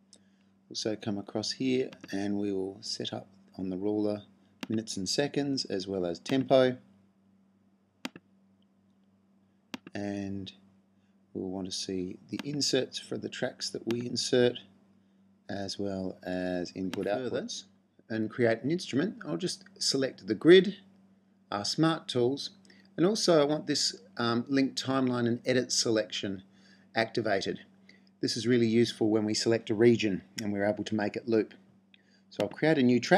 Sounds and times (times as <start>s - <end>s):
Speech: 0.8s - 6.8s, 10.0s - 10.5s, 11.4s - 14.6s, 15.5s - 20.8s, 21.5s - 26.4s, 27.0s - 27.6s, 28.2s - 31.6s, 32.4s - 33.1s.